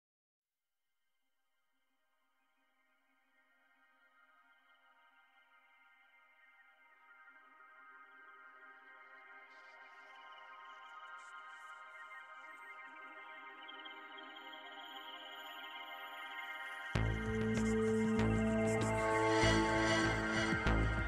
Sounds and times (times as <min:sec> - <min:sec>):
Music: 0:02.0 - 0:21.0.